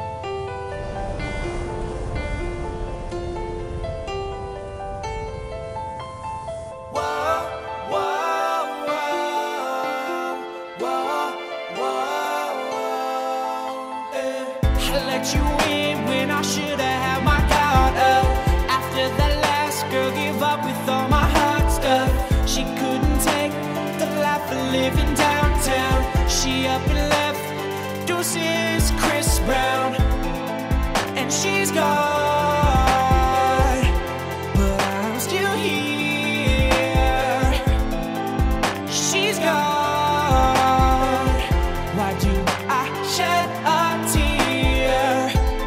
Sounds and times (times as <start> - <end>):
Music: 0.0 - 45.6.